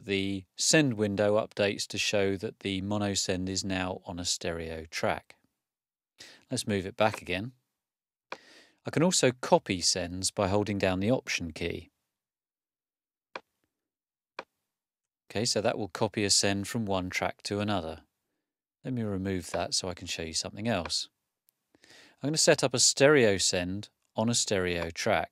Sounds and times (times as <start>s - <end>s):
Speech: 0.0s - 5.4s, 6.5s - 7.6s, 8.9s - 11.9s, 15.3s - 18.1s, 18.8s - 21.2s, 22.2s - 25.3s.